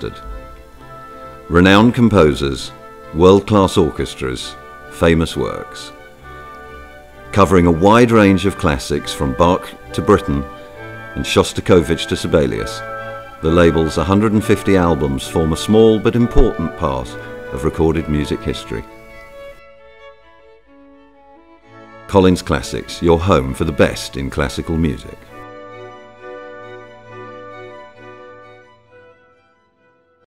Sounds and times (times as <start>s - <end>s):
Speech: 0.0s - 0.3s, 1.5s - 6.0s, 7.3s - 10.5s, 11.2s - 12.8s, 13.4s - 18.9s, 22.1s - 25.2s
Background music: 0.0s - 30.2s
Classical music: 0.0s - 30.2s.